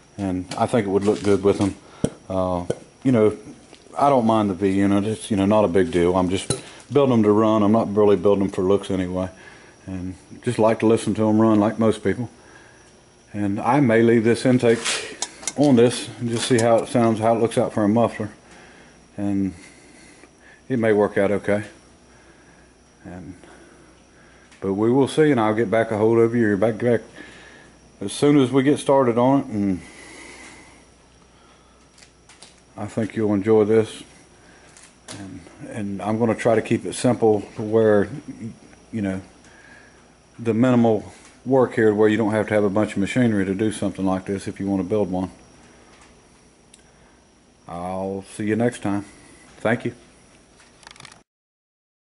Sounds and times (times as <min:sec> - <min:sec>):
Speech: 0:00.2 - 0:12.4, 0:13.3 - 0:18.4, 0:19.2 - 0:19.6, 0:20.7 - 0:21.8, 0:23.0 - 0:23.5, 0:24.6 - 0:27.1, 0:28.0 - 0:29.8, 0:32.8 - 0:34.1, 0:35.1 - 0:39.3, 0:40.4 - 0:45.4, 0:47.7 - 0:50.1.